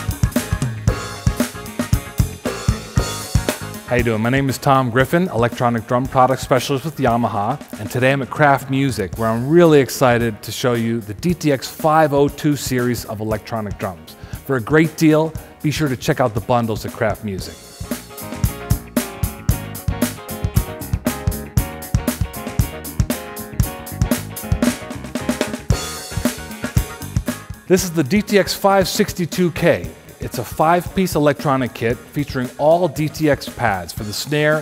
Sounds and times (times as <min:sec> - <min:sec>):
Bass drum: 0:00.0 - 0:04.7, 0:16.8 - 0:28.3
Drum kit: 0:00.0 - 0:34.6.